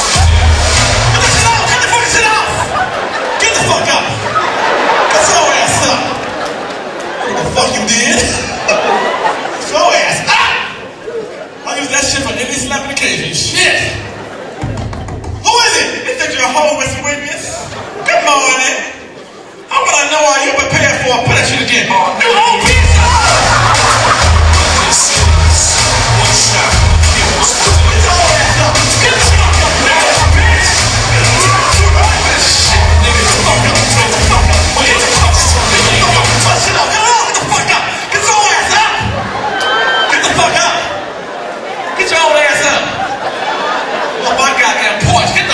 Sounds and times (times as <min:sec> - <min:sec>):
Speech: 0:01.2 - 0:02.8, 0:03.4 - 0:04.3, 0:05.1 - 0:06.2, 0:07.2 - 0:08.8, 0:09.6 - 0:14.2, 0:15.4 - 0:19.1, 0:19.7 - 0:23.4, 0:26.2 - 0:39.2, 0:40.1 - 0:41.0, 0:42.0 - 0:43.1, 0:44.2 - 0:45.5.